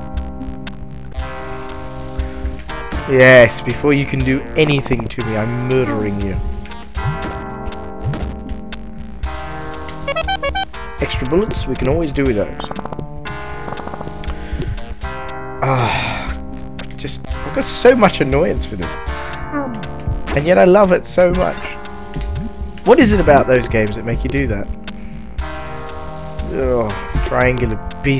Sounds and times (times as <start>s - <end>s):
Music: 0.0s - 28.1s
Speech: 3.1s - 6.4s, 11.0s - 12.7s, 17.0s - 19.0s, 20.3s - 21.8s, 22.9s - 24.7s, 26.5s - 28.1s.